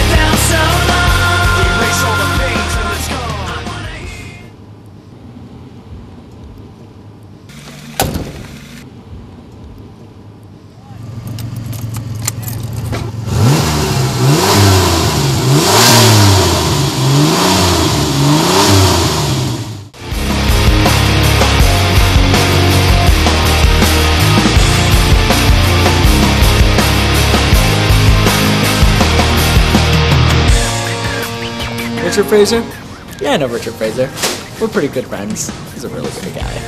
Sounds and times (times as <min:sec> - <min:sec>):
Outside, urban or manmade: 0:00.0 - 0:36.6
Car: 0:03.9 - 0:20.0
Medium engine (mid frequency): 0:04.1 - 0:30.6
Accelerating, revving, vroom: 0:13.2 - 0:19.8.